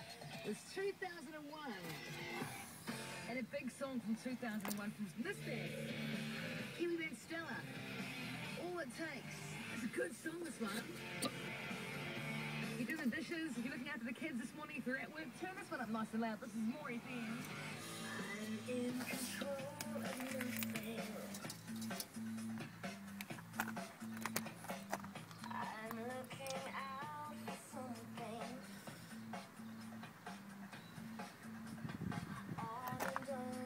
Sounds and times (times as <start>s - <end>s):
Music: 0.0s - 33.6s.